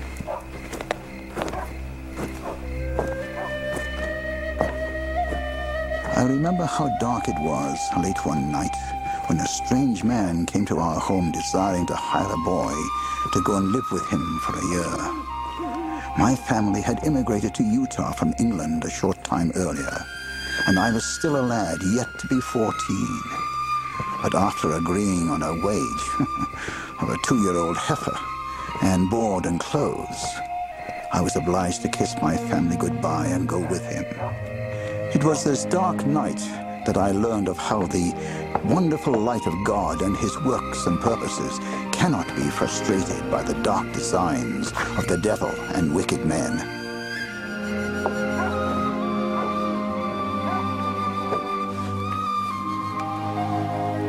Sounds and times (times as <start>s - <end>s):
Music: 0.0s - 54.0s
Speech: 6.1s - 15.2s, 16.1s - 20.1s, 20.7s - 23.4s, 24.2s - 26.3s, 27.0s - 28.2s, 28.8s - 30.4s, 31.1s - 34.1s, 35.1s - 46.7s.